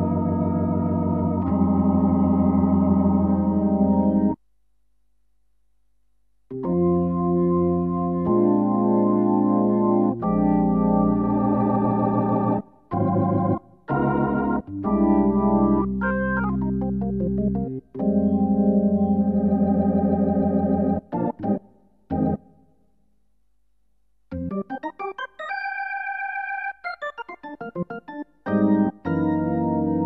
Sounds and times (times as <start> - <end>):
Electronic organ: 0.0 - 4.4, 6.5 - 22.5, 24.3 - 30.0.